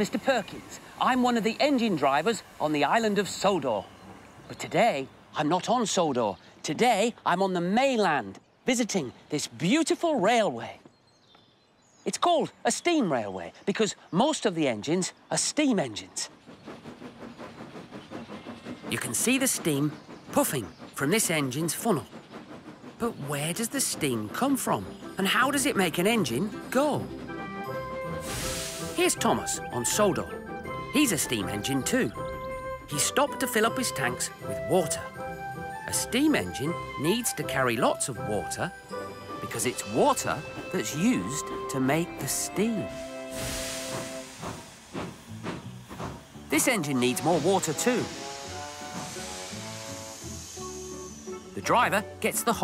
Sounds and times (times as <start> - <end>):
Speech: 0.0 - 3.9, 4.5 - 10.8, 12.1 - 16.3, 18.9 - 22.1, 23.0 - 27.1, 29.0 - 30.4, 31.0 - 32.2, 32.9 - 35.1, 35.9 - 38.7, 39.4 - 42.9, 46.5 - 48.1, 51.6 - 52.6.